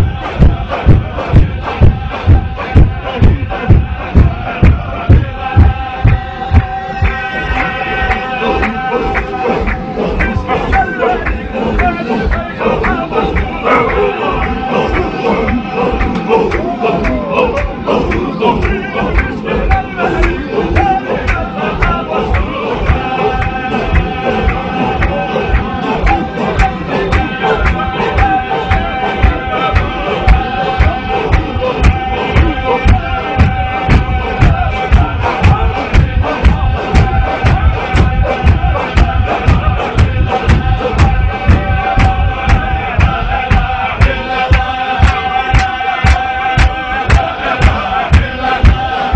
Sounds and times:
Mantra: 0:00.0 - 0:49.1.

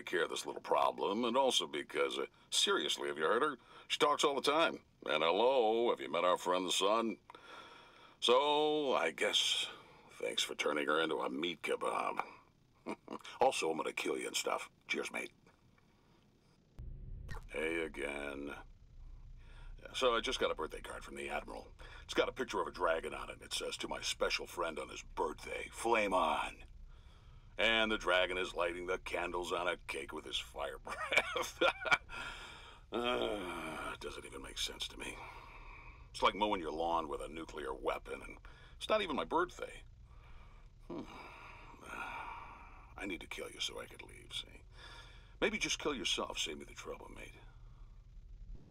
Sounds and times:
Speech: 0:00.0 - 0:07.2, 0:08.2 - 0:12.4, 0:13.0 - 0:15.4, 0:17.4 - 0:18.6, 0:19.8 - 0:26.6, 0:27.6 - 0:32.0, 0:32.9 - 0:35.4, 0:36.2 - 0:39.8, 0:43.0 - 0:44.7, 0:45.4 - 0:47.4.

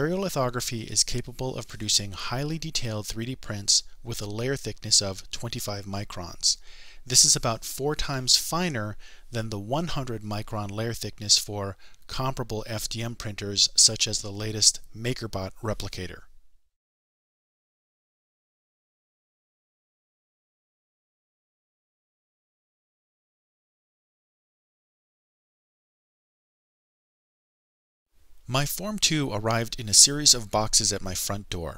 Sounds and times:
Speech: 0:00.0 - 0:16.3, 0:28.5 - 0:31.7.

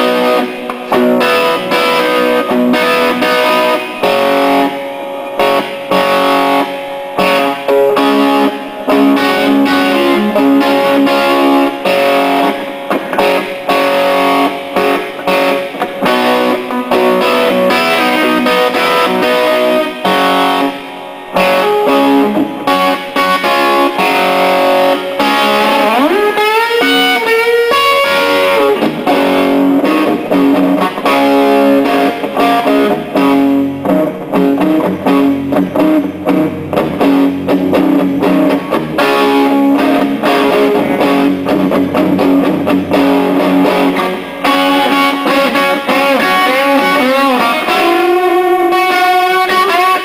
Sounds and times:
Electric guitar: 0:00.0 - 0:50.0
Strum: 0:00.0 - 0:50.0.

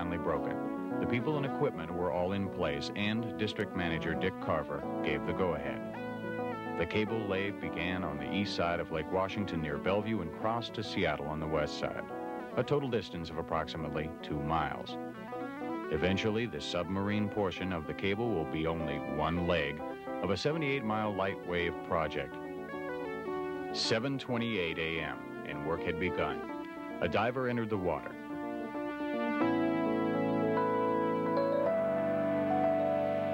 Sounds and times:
Speech: 0:00.0 - 0:05.8, 0:06.8 - 0:15.0, 0:15.9 - 0:22.4, 0:23.8 - 0:28.2
Music: 0:00.0 - 0:33.3.

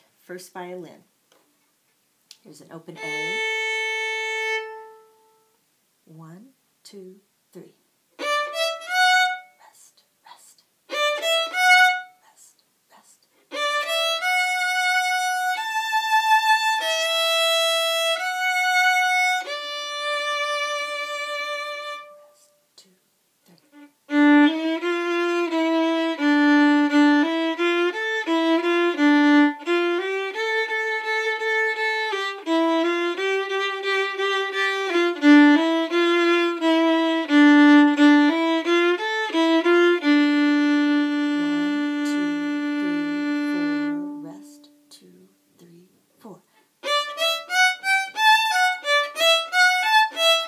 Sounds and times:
Violin, fiddle: 0:02.9 - 0:05.5, 0:08.2 - 0:09.6, 0:10.9 - 0:12.2, 0:13.5 - 0:22.4, 0:23.7 - 0:44.8, 0:46.8 - 0:50.4.

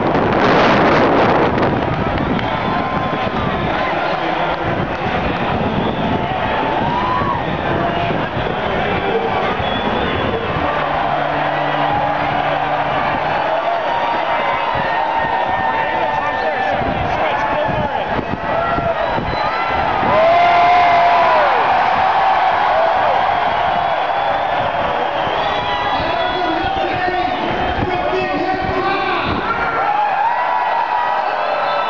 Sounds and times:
Speech: 0:26.0 - 0:29.5.

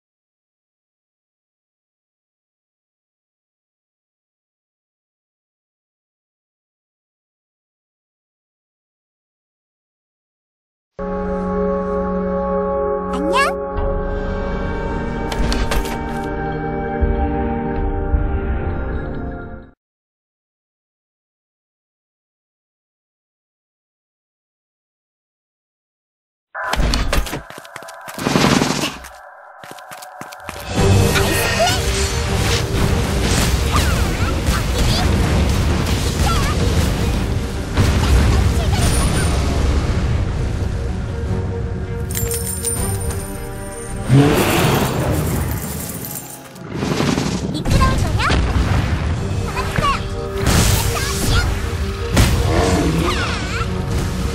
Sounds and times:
Ambient music: 0:11.0 - 0:19.8, 0:26.6 - 0:47.5, 0:48.4 - 0:54.3
Speech: 0:13.1 - 0:13.6, 0:33.7 - 0:35.1, 0:38.3 - 0:39.4, 0:47.5 - 0:48.4, 0:49.5 - 0:50.1, 0:50.8 - 0:51.6.

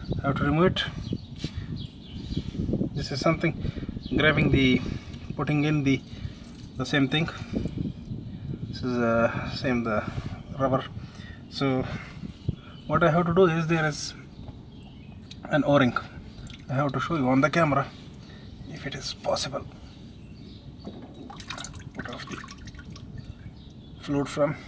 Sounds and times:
Outside, urban or manmade: 0:00.0 - 0:24.6
Speech: 0:00.2 - 0:01.0, 0:12.9 - 0:14.2, 0:15.4 - 0:16.1, 0:16.7 - 0:17.9, 0:18.7 - 0:19.7, 0:24.0 - 0:24.6
Liquid: 0:16.4 - 0:16.7, 0:21.2 - 0:23.5.

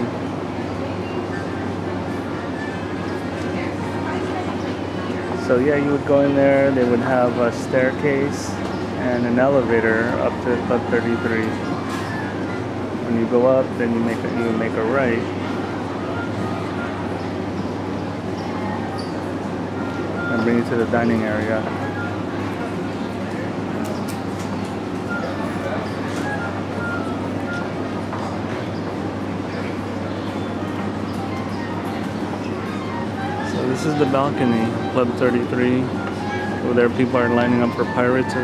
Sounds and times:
Speech: 0:03.4 - 0:11.7, 0:13.0 - 0:15.4, 0:20.3 - 0:21.7, 0:33.4 - 0:38.4.

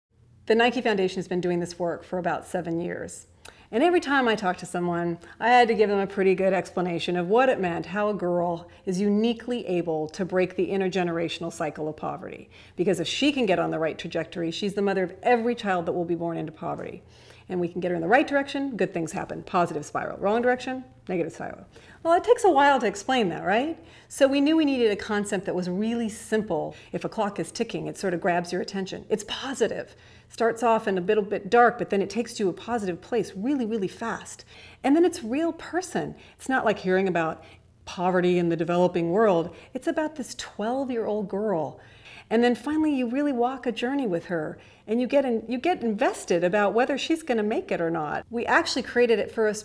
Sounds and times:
Speech: 0:00.5 - 0:49.6.

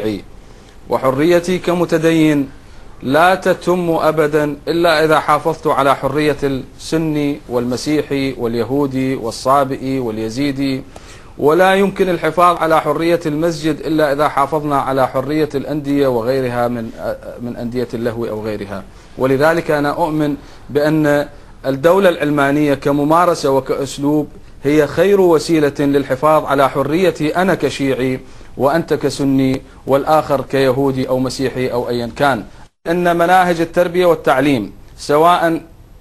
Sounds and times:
Speech: 0:00.0 - 0:00.3, 0:00.9 - 0:35.7.

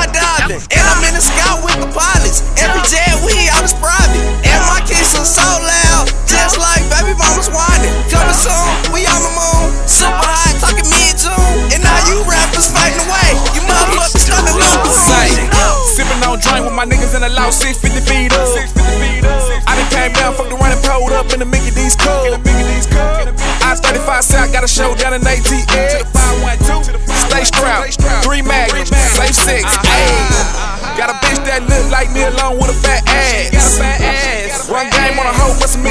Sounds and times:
Exciting music: 0:00.0 - 0:35.9.

